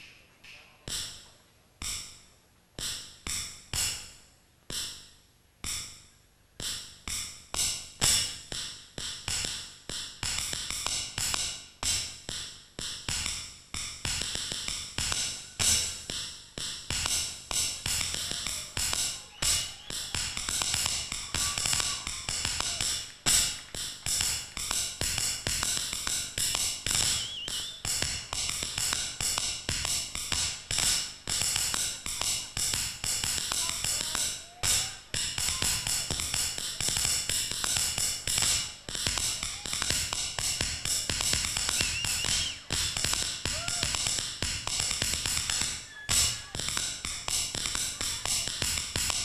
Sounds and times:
Tap: 0:06.6 - 0:49.2.

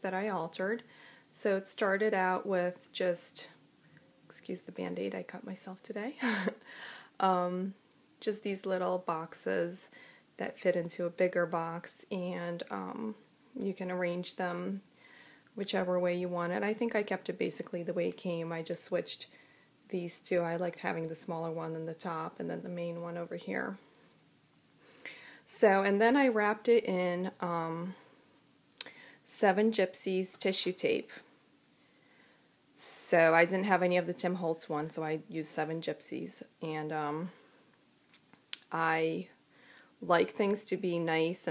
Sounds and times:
Speech: 0:00.0 - 0:00.8, 0:01.4 - 0:03.6, 0:04.3 - 0:06.2, 0:07.2 - 0:14.8, 0:15.6 - 0:19.3, 0:19.9 - 0:23.8, 0:25.5 - 0:28.0, 0:29.3 - 0:31.3, 0:32.8 - 0:37.4, 0:38.6 - 0:39.4, 0:40.0 - 0:41.5.

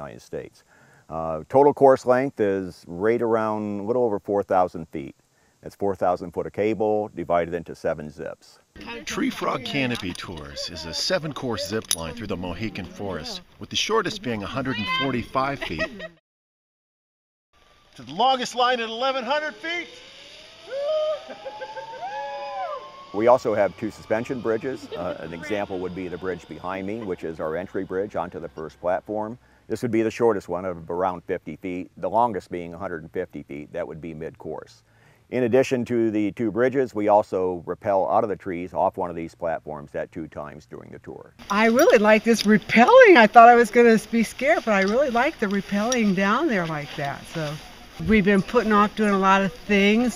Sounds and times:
Speech: 0:00.0 - 0:15.9, 0:23.2 - 0:50.1.

